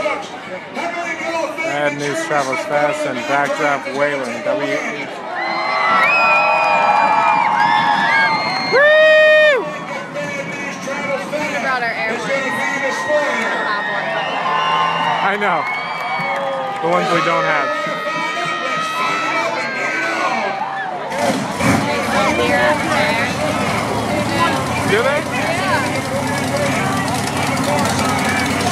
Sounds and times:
Speech: 0.0 - 5.2, 16.8 - 20.6, 21.2 - 28.7
Vehicle: 0.0 - 5.3, 5.9 - 18.6, 19.4 - 28.7.

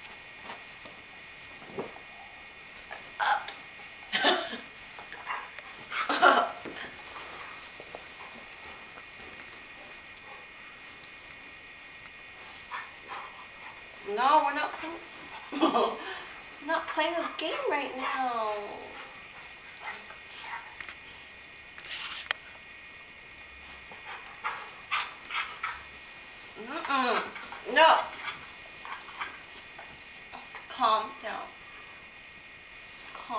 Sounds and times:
Speech: 14.0 - 15.1, 16.6 - 19.0, 26.6 - 28.1, 30.7 - 31.6, 33.2 - 33.3.

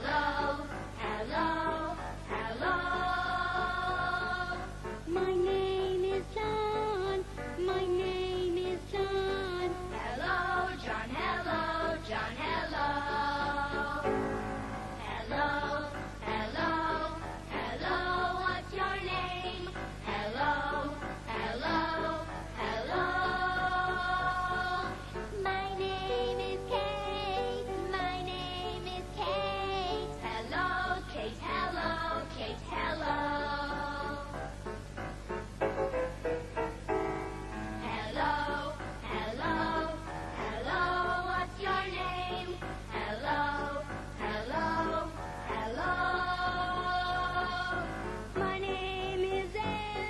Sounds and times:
Music: 0.0 - 50.0.

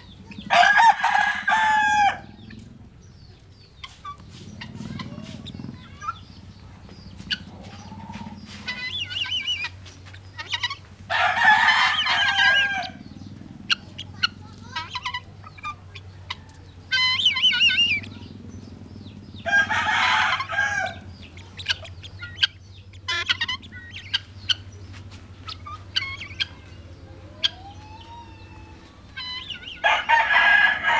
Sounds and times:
Fowl: 7.2 - 13.0, 13.7 - 18.1, 19.5 - 26.7, 27.3 - 31.0.

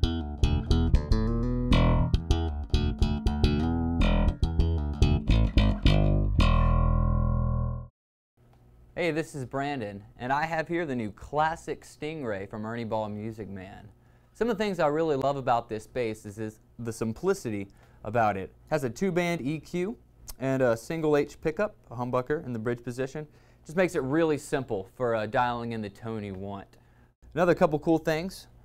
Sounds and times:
Speech: 9.0 - 28.6.

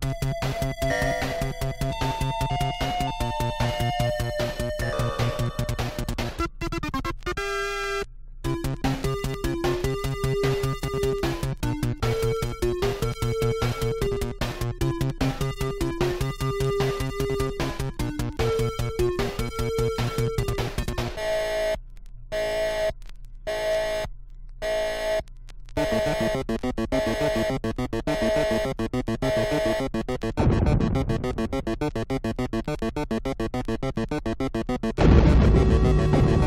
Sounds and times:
Video game music: 0.0 - 22.9, 23.5 - 36.4
Background music: 0.0 - 36.4.

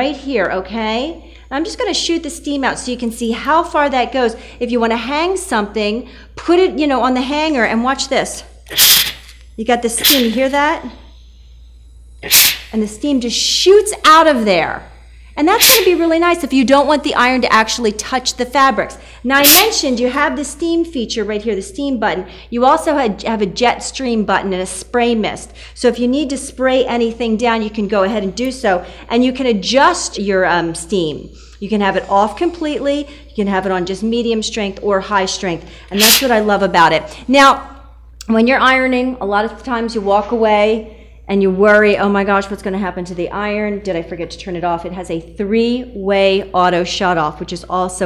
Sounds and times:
Speech: 0.0 - 8.5, 9.6 - 10.9, 12.8 - 48.0.

